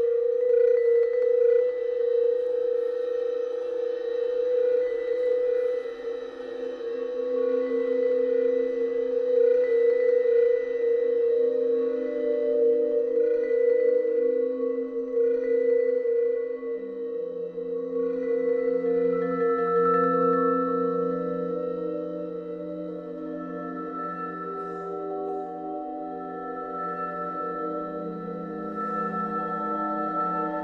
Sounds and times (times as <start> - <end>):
Percussion: 0.0 - 30.6.